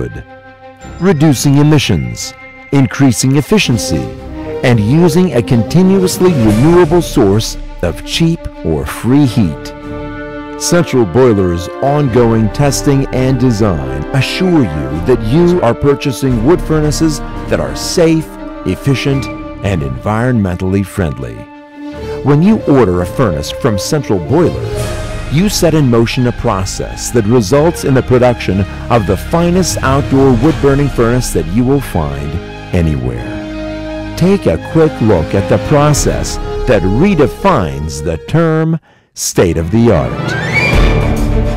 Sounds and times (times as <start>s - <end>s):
Speech: 0.0s - 0.2s, 0.9s - 9.8s, 10.6s - 21.5s, 22.2s - 33.5s, 34.2s - 40.3s
Music: 0.0s - 41.5s.